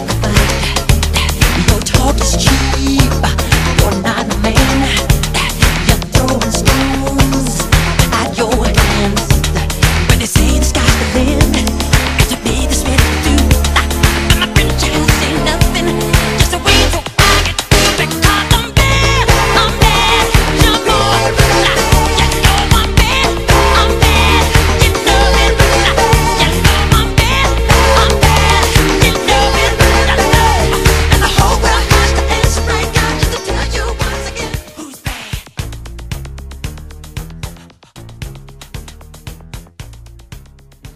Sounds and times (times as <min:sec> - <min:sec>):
Disco: 0:00.0 - 0:40.9.